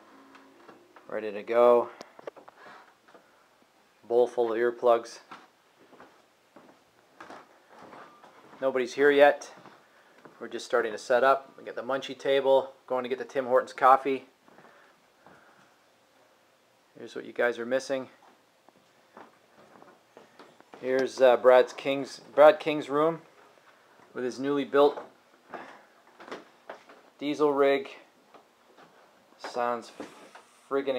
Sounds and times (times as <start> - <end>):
Speech: 1.1 - 2.0, 4.0 - 5.3, 8.6 - 9.6, 10.4 - 14.3, 17.0 - 18.2, 20.8 - 23.3, 24.1 - 25.1, 27.2 - 28.1, 29.4 - 30.1, 30.7 - 30.9.